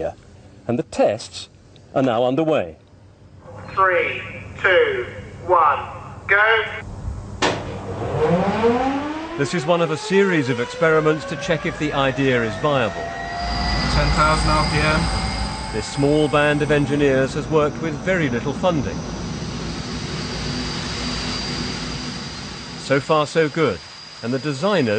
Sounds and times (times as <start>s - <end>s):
Jet engine: 6.8s - 24.9s
Fixed-wing aircraft, airplane: 12.9s - 22.9s.